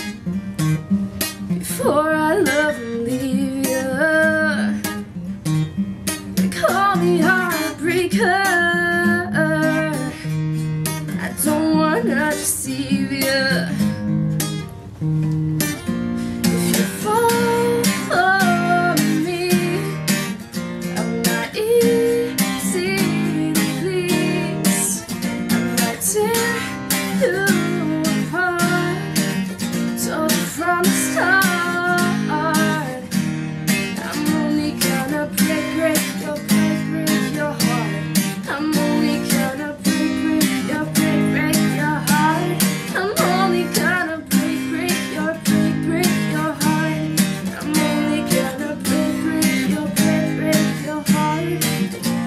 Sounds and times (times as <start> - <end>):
Music: 0.0 - 52.2.